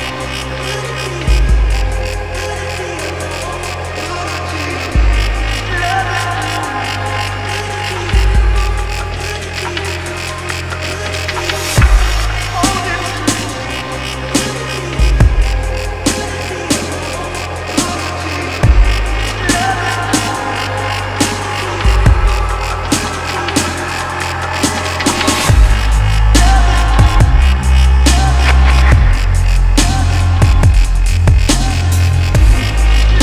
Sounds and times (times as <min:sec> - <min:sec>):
Dubstep: 0:00.0 - 0:33.2.